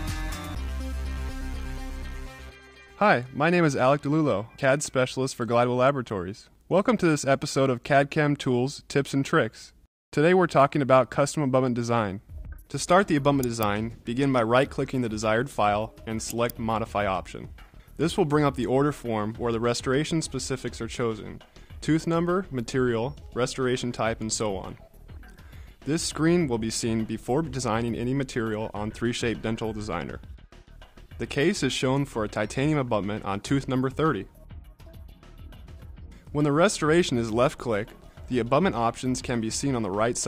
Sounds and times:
Music: 0.0 - 5.1, 12.2 - 40.2
Speech: 3.0 - 24.8, 25.9 - 30.2, 31.2 - 34.3, 36.3 - 40.2.

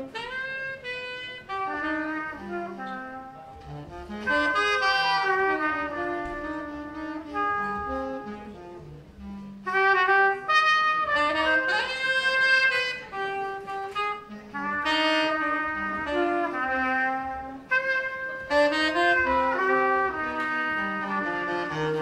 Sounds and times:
Jazz: 0.0 - 22.0.

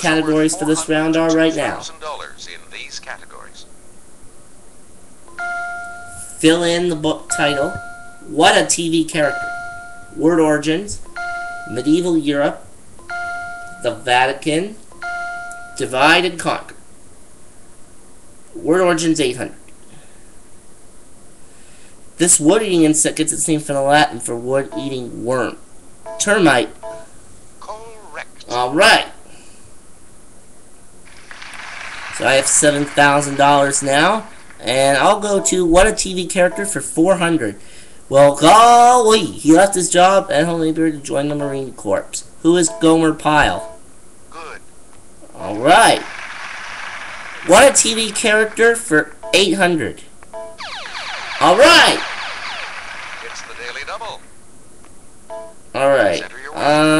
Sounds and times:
Speech: 0.0 - 3.7, 6.3 - 9.4, 10.2 - 11.0, 11.7 - 12.6, 13.8 - 14.8, 15.8 - 16.8, 18.6 - 19.6, 22.2 - 25.6, 26.2 - 26.8, 27.6 - 29.2, 32.2 - 43.7, 44.3 - 44.6, 45.3 - 46.1, 47.5 - 50.1, 51.4 - 52.0, 53.2 - 54.2, 55.8 - 56.9.

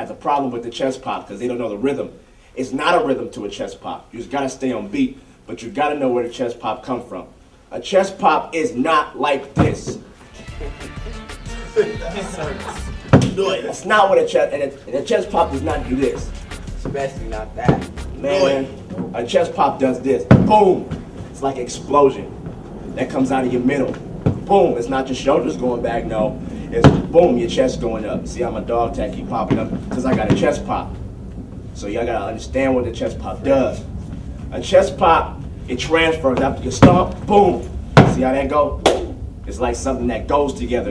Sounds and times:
Speech: 0.0 - 10.0, 11.8 - 22.3, 23.0 - 31.0, 31.8 - 33.9, 34.5 - 40.9.

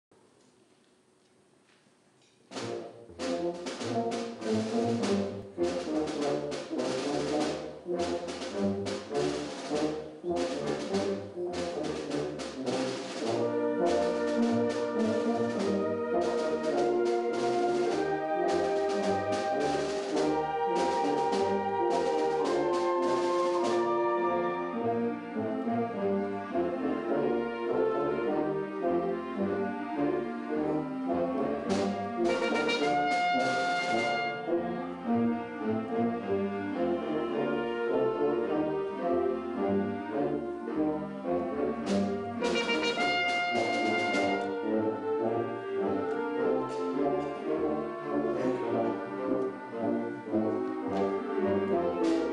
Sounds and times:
Inside, large room or hall: 0.1 - 52.3
Orchestra: 2.2 - 52.3.

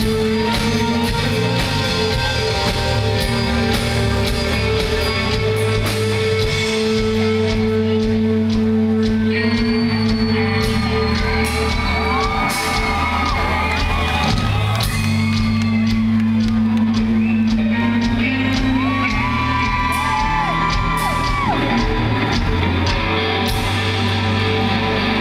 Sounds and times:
Inside, public space: 0.0 - 25.2
Music: 0.0 - 25.2.

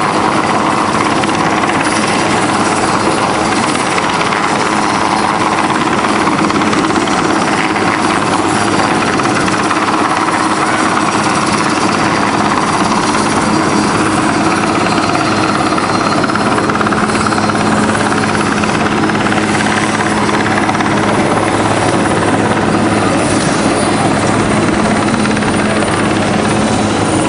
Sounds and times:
Helicopter: 0.0 - 27.2.

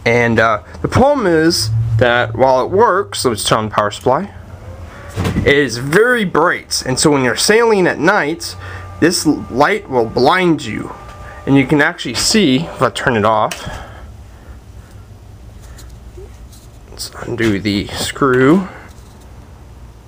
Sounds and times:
Speech: 0.0 - 4.4, 5.4 - 13.8, 16.9 - 18.9.

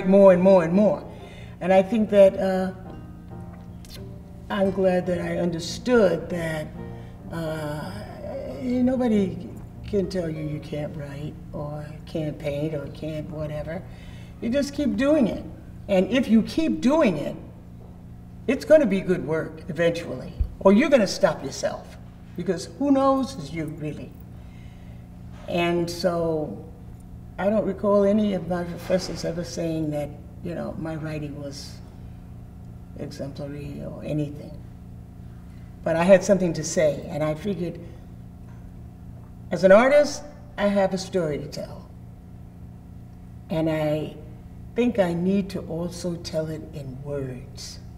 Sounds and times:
Speech: 0.0 - 2.9, 4.5 - 17.5, 18.5 - 24.2, 25.5 - 26.7, 27.4 - 31.8, 33.0 - 34.6, 35.8 - 37.9, 39.5 - 42.0, 43.5 - 47.9.

